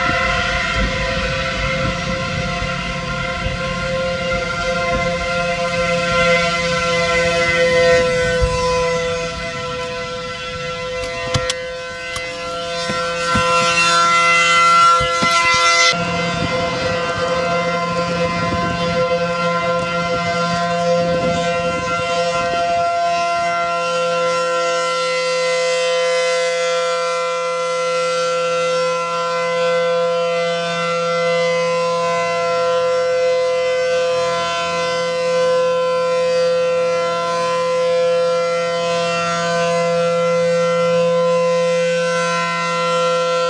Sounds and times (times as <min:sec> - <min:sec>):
Civil defense siren: 0:00.0 - 0:43.5.